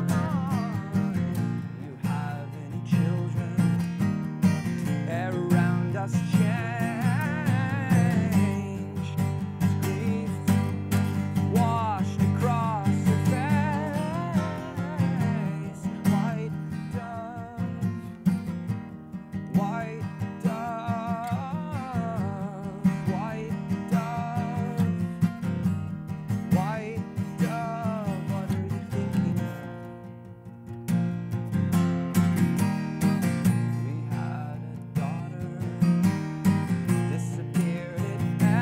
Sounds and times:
Music: 0.0 - 38.6.

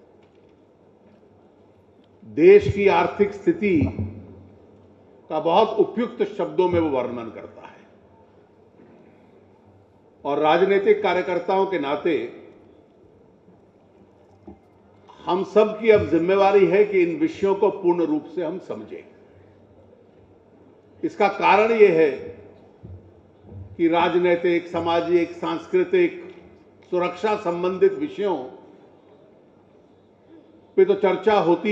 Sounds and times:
Narration, monologue: 0.0 - 31.7
Male speech, man speaking: 2.3 - 4.0, 5.3 - 7.8, 10.3 - 12.4, 15.2 - 19.1, 21.0 - 22.3, 23.8 - 26.3, 26.9 - 28.6, 30.8 - 31.7.

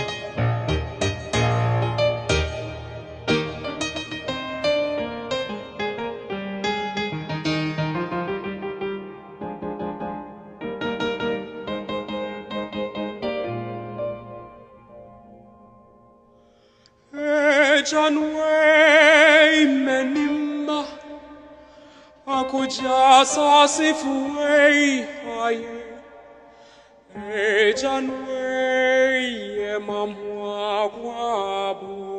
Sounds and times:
Piano: 0.0 - 32.1.

